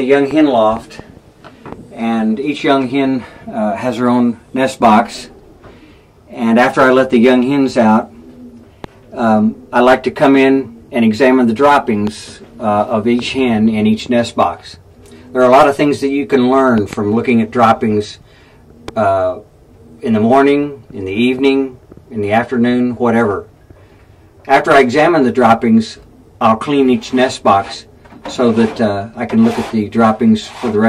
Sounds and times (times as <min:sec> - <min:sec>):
Speech: 0:00.0 - 0:01.1, 0:01.9 - 0:05.3, 0:06.3 - 0:08.1, 0:09.1 - 0:18.2, 0:18.9 - 0:23.5, 0:24.5 - 0:30.8.